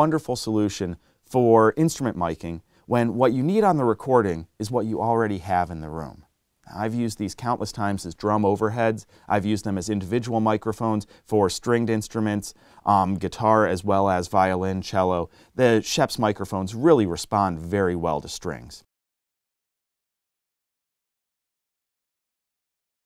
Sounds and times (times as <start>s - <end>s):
Speech: 0.0s - 18.9s.